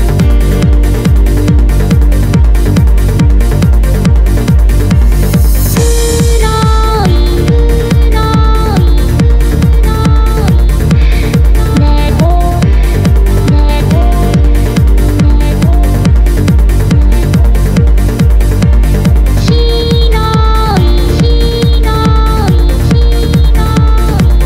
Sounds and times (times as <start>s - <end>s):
Music: 0.0s - 24.4s.